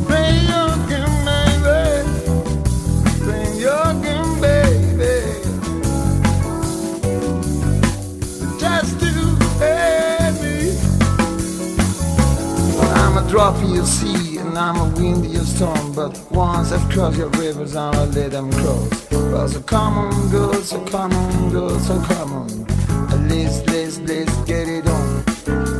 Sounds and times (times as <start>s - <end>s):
Funk: 0.0s - 25.7s.